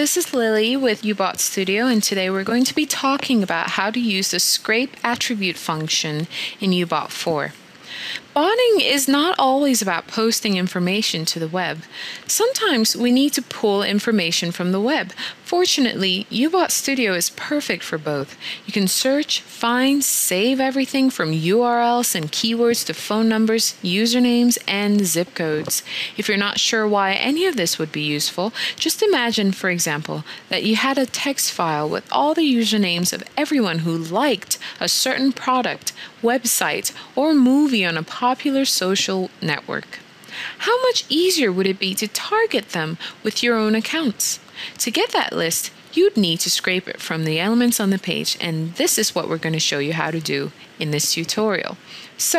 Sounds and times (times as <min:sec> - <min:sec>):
Speech: 0:00.0 - 0:07.6, 0:08.2 - 0:52.3.